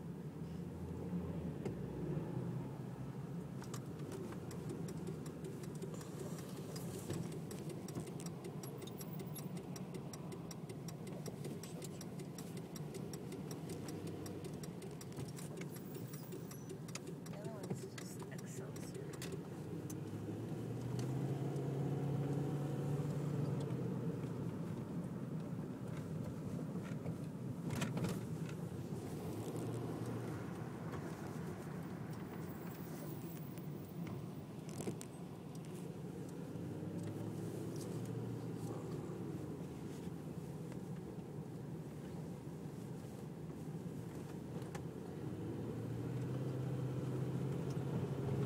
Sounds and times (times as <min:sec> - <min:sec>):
Vehicle: 0:00.0 - 0:48.4.